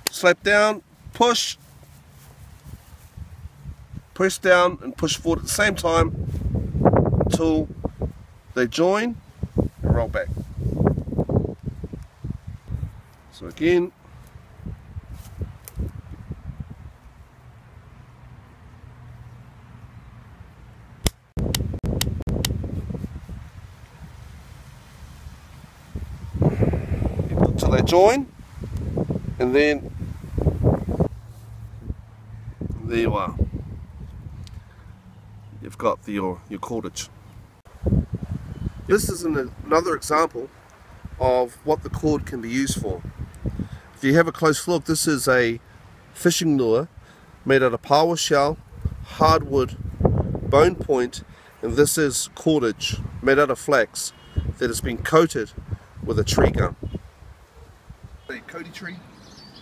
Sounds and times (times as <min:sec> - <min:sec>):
Wind noise (microphone): 0:05.2 - 0:08.4, 0:09.2 - 0:13.0, 0:14.6 - 0:17.0, 0:21.4 - 0:24.3, 0:25.9 - 0:34.7, 0:37.7 - 0:39.7, 0:41.8 - 0:43.8, 0:48.6 - 0:51.4, 0:54.3 - 0:57.1.